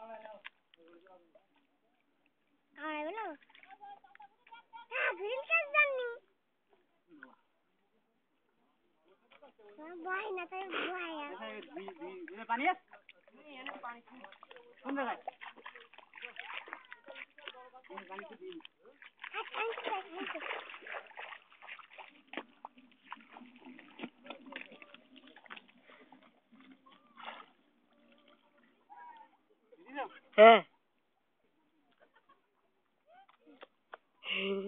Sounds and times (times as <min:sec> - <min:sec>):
Outside, rural or natural: 0:00.0 - 0:34.6.